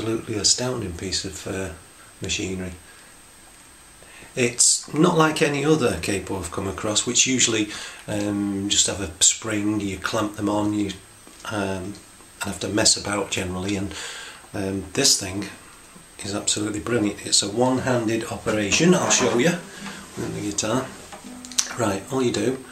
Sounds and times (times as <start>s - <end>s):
Speech: 0.0s - 2.8s, 4.3s - 15.6s, 16.2s - 21.0s, 21.6s - 22.7s.